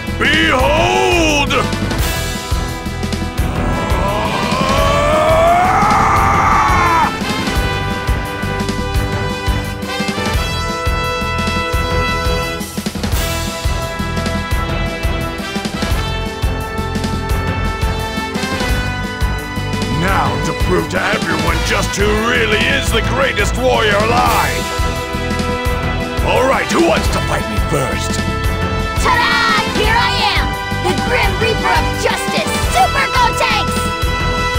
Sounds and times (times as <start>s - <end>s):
Music: 0.0s - 34.5s
Speech: 0.2s - 1.7s, 19.9s - 24.6s, 26.2s - 28.2s, 29.0s - 33.9s.